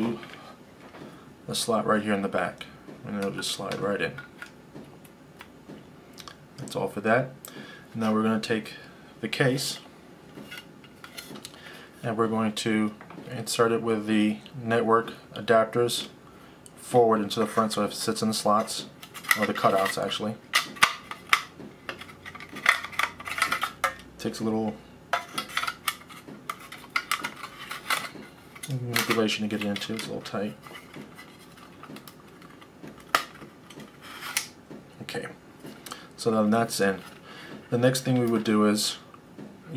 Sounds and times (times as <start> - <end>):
Speech: 0.0 - 0.3, 1.5 - 4.2, 6.6 - 7.4, 8.0 - 9.9, 12.0 - 16.2, 16.8 - 20.4, 24.2 - 24.8, 28.7 - 30.6, 35.0 - 35.4, 36.2 - 37.1, 37.7 - 39.1
Inside, small room: 0.0 - 39.7.